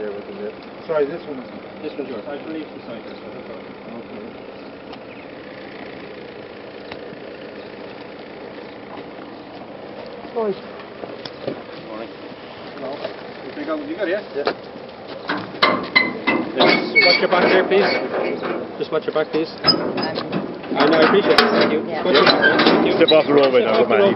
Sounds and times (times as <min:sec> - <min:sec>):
Speech: 0:20.8 - 0:24.1.